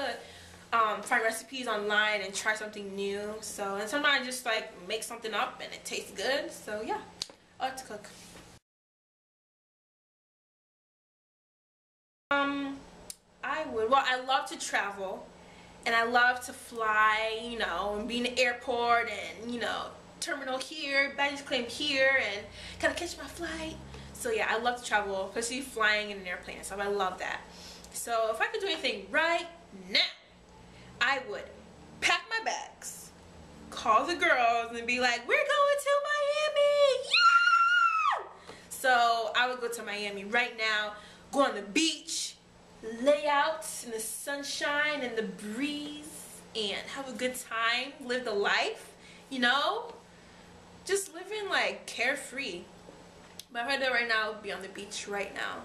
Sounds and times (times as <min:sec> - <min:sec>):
Inside, small room: 0:00.0 - 0:08.6, 0:12.3 - 0:55.6
Speech: 0:00.8 - 0:08.1, 0:12.3 - 0:12.8, 0:13.4 - 0:15.3, 0:15.9 - 0:30.2, 0:31.0 - 0:33.1, 0:33.8 - 0:37.1, 0:38.7 - 0:50.0, 0:50.9 - 0:52.7, 0:53.4 - 0:55.6.